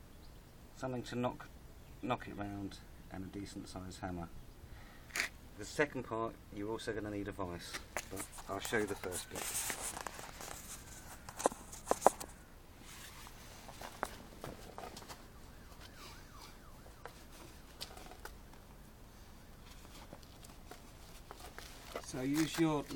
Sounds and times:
Speech: 0:00.8 - 0:04.3, 0:05.6 - 0:09.5, 0:22.0 - 0:22.9.

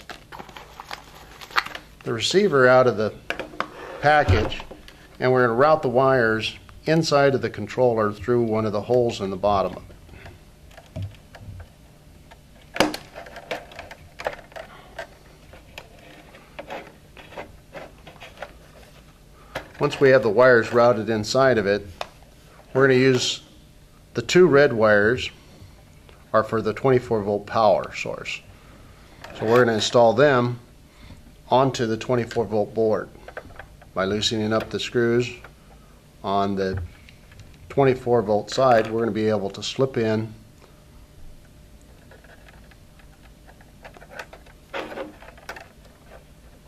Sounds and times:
Speech: 0:02.0 - 0:03.2, 0:04.0 - 0:09.9, 0:19.8 - 0:21.9, 0:22.7 - 0:23.5, 0:24.2 - 0:25.4, 0:26.3 - 0:28.5, 0:29.4 - 0:30.7, 0:31.5 - 0:33.2, 0:34.0 - 0:35.5, 0:36.2 - 0:36.9, 0:37.7 - 0:40.4.

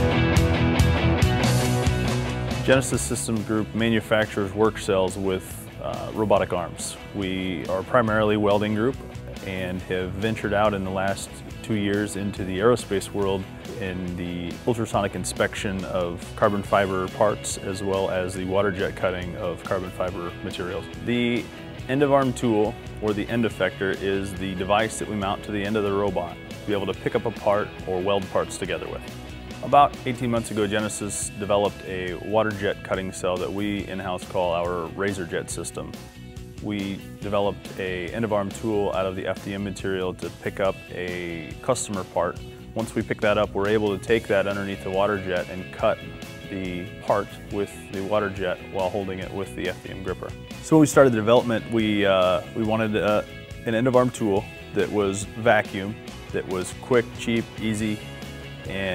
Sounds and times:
Music: 0:00.0 - 0:58.9
Speech: 0:02.6 - 0:36.0, 0:36.6 - 0:58.0, 0:58.7 - 0:58.9.

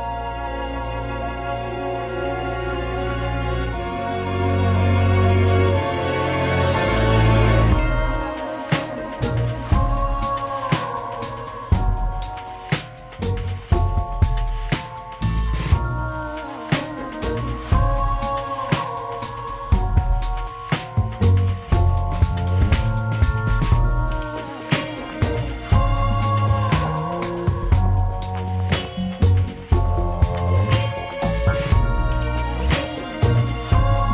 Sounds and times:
Music: 0:00.0 - 0:34.1.

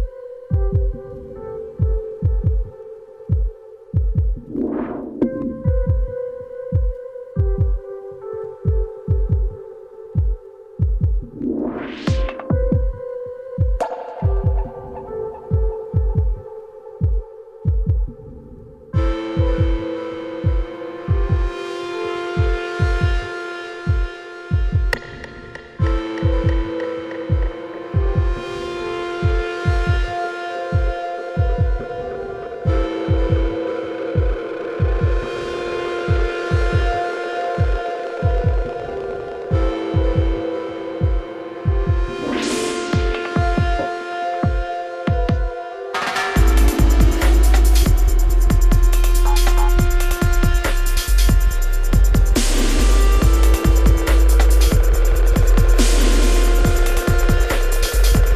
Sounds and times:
Drum and bass: 0:10.2 - 0:18.2, 0:19.0 - 0:58.3.

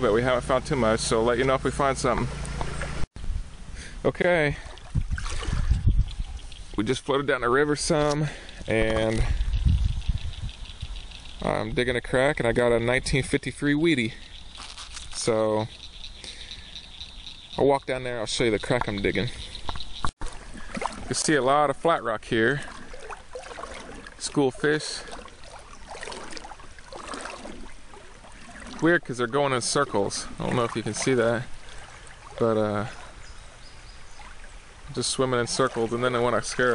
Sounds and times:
Speech: 0:00.0 - 0:02.3, 0:04.0 - 0:04.7, 0:06.8 - 0:09.4, 0:11.4 - 0:14.2, 0:15.2 - 0:15.7, 0:17.6 - 0:19.3, 0:21.1 - 0:22.7, 0:24.2 - 0:25.1, 0:28.8 - 0:31.5, 0:32.4 - 0:33.0, 0:34.9 - 0:36.7.

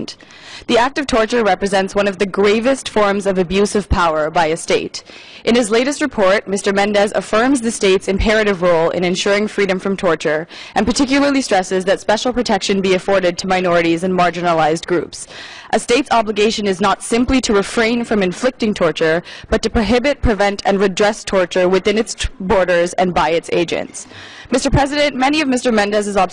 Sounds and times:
Female speech, woman speaking: 0:00.0 - 0:26.3
Narration, monologue: 0:00.0 - 0:26.3.

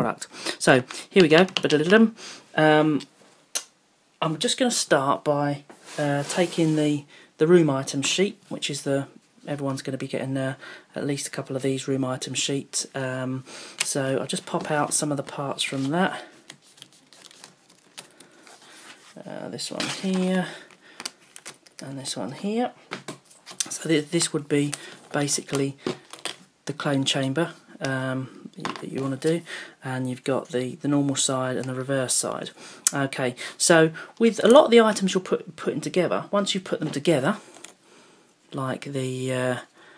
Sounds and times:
Speech: 0:00.0 - 0:03.1, 0:04.2 - 0:16.3, 0:19.2 - 0:20.6, 0:21.8 - 0:22.8, 0:23.6 - 0:25.8, 0:26.7 - 0:37.4, 0:38.5 - 0:39.7.

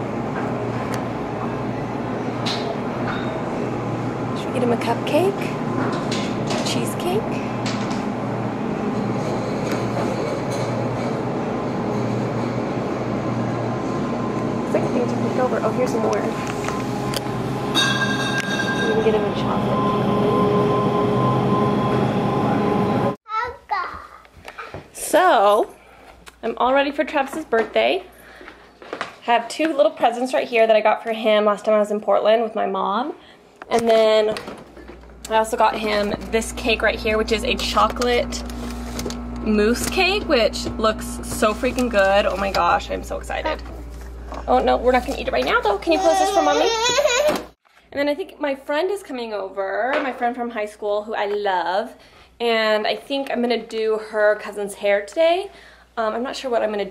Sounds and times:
Child speech, kid speaking: 0:23.3 - 0:24.8, 0:45.6 - 0:47.2.

